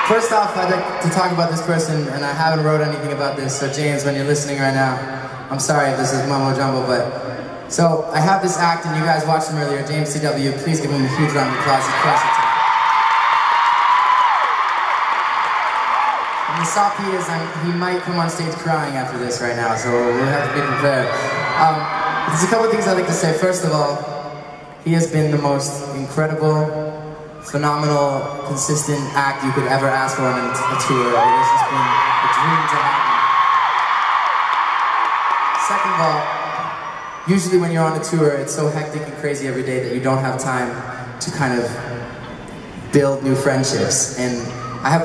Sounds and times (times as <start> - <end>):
Speech: 0.0 - 12.5, 16.5 - 24.2, 24.8 - 33.2, 35.6 - 36.4, 37.3 - 42.0, 42.9 - 45.0.